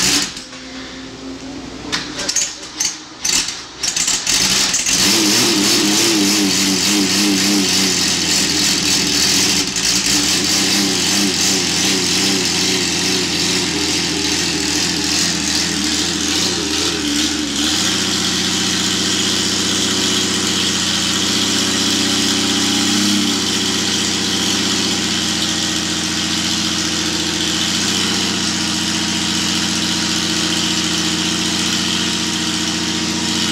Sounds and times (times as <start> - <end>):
Medium engine (mid frequency): 0.0 - 33.5
Vehicle: 0.0 - 33.5
Idling: 2.8 - 33.5
Accelerating, revving, vroom: 4.4 - 25.0.